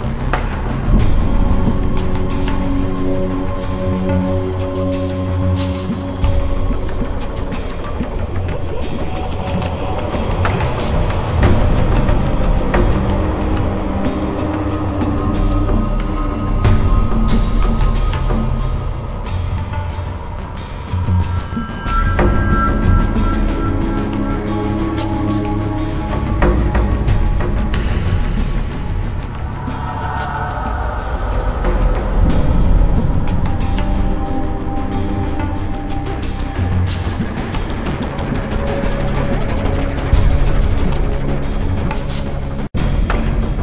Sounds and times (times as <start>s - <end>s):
Soundtrack music: 0.0s - 43.6s.